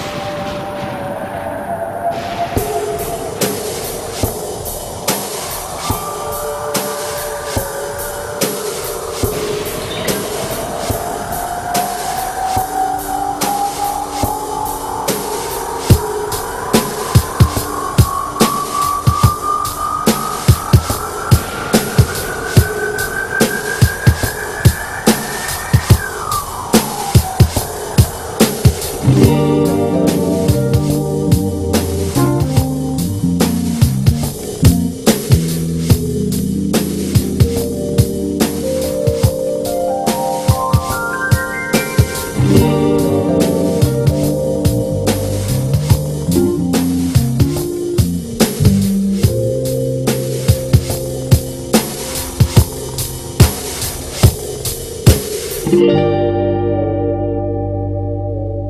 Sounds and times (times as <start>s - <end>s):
Music: 0.0s - 58.6s.